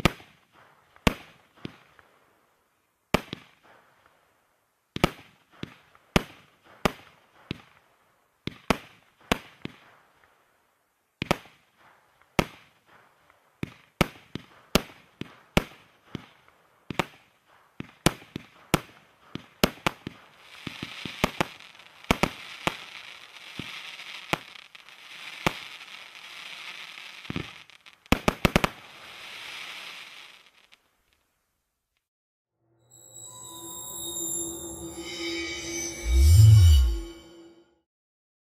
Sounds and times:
Fireworks: 0.0s - 2.4s, 3.1s - 4.3s, 4.9s - 10.5s, 11.2s - 31.3s
Music: 32.7s - 37.8s.

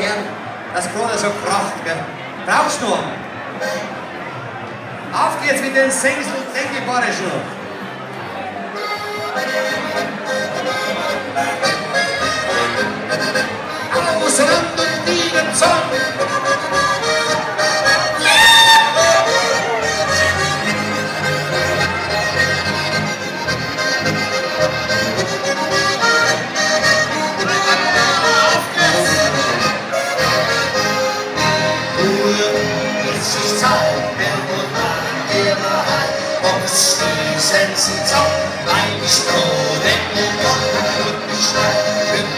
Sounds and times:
Music: 0.0s - 5.2s, 6.6s - 42.3s.

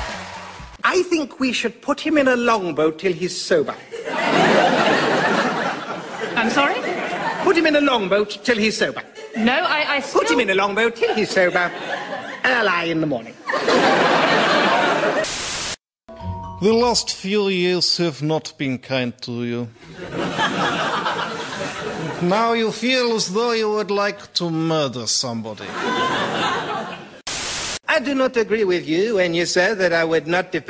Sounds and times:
Speech: 0.8s - 3.8s, 16.6s - 19.7s, 22.2s - 25.8s, 27.9s - 30.7s.

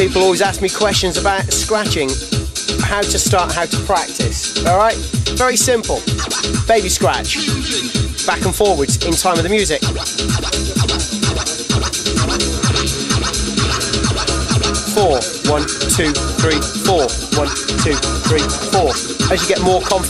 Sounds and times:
Speech: 0.0s - 2.2s, 2.8s - 6.0s, 6.7s - 7.4s, 8.3s - 9.9s, 14.9s - 20.0s
Scratching (performance technique): 0.0s - 20.0s.

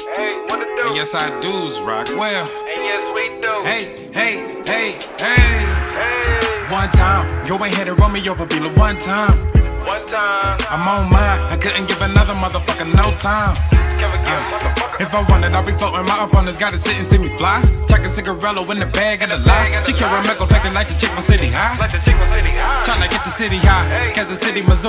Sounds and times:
Music: 0.0s - 24.8s.

